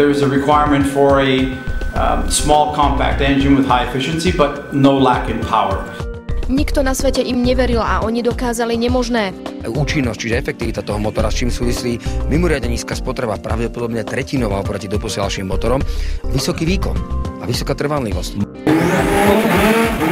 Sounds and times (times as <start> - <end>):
Speech: 0.0 - 18.5
Music: 0.0 - 20.1.